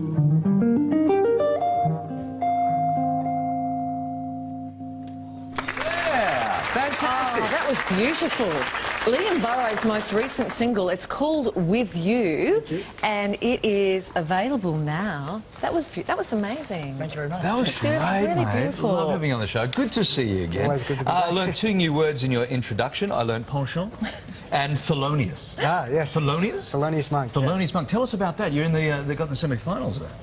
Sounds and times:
Music: 0:00.0 - 0:05.6
Inside, large room or hall: 0:04.8 - 0:30.2.

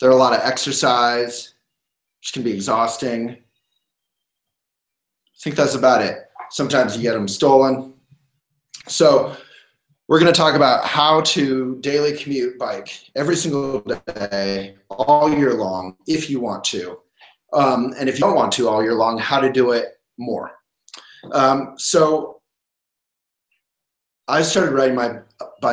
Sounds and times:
Speech: 0:00.0 - 0:01.5, 0:02.2 - 0:03.4, 0:05.4 - 0:07.9, 0:08.8 - 0:09.4, 0:10.1 - 0:22.4, 0:24.3 - 0:25.7.

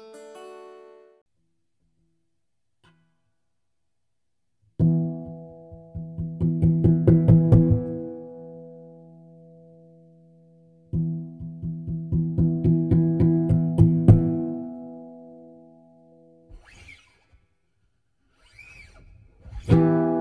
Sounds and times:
Music: 0:00.0 - 0:01.3, 0:04.8 - 0:16.6, 0:18.9 - 0:20.2.

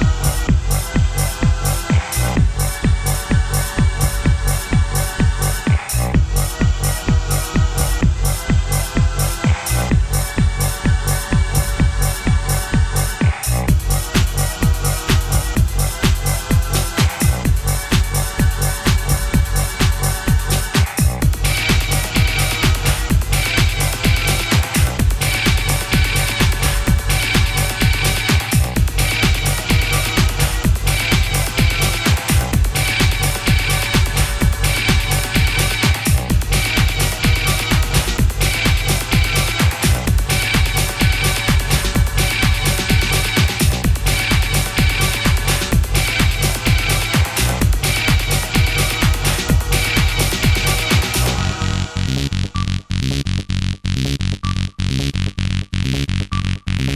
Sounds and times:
Music: 0:00.0 - 0:56.9.

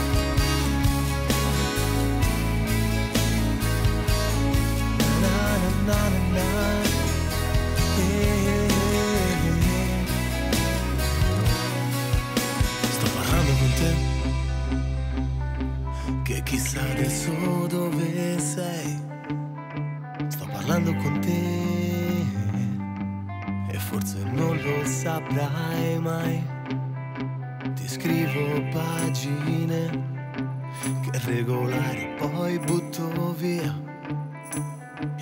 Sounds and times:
Sad music: 0:00.0 - 0:35.2.

